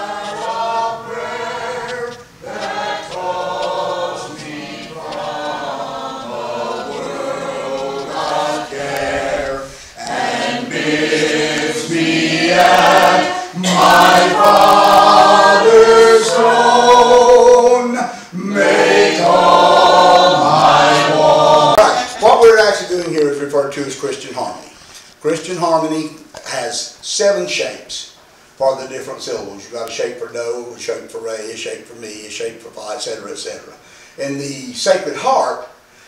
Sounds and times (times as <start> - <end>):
A capella: 0.0 - 22.3.